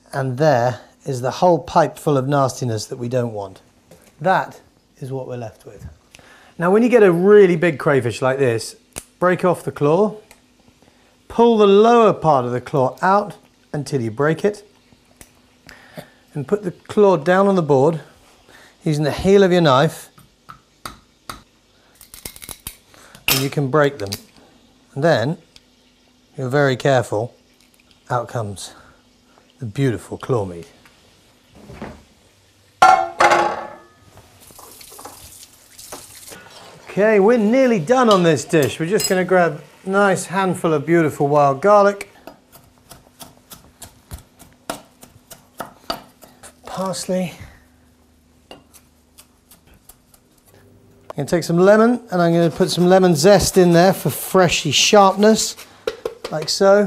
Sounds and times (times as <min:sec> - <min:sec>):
Speech: 0:00.0 - 0:03.6, 0:04.2 - 0:06.0, 0:06.6 - 0:10.2, 0:11.3 - 0:14.7, 0:16.3 - 0:18.2, 0:18.8 - 0:20.1, 0:23.4 - 0:24.3, 0:25.0 - 0:25.4, 0:26.4 - 0:27.4, 0:28.1 - 0:28.8, 0:29.6 - 0:30.8, 0:36.9 - 0:42.2, 0:46.6 - 0:47.6, 0:51.1 - 0:55.6, 0:56.3 - 0:56.8.